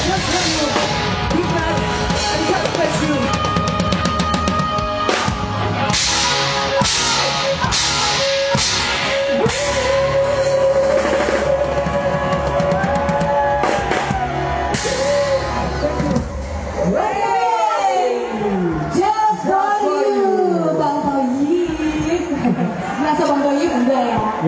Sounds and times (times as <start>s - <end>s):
Drum: 0.0s - 16.8s
Drum kit: 0.0s - 17.0s
Gospel music: 0.0s - 24.4s
Rock music: 0.0s - 24.4s.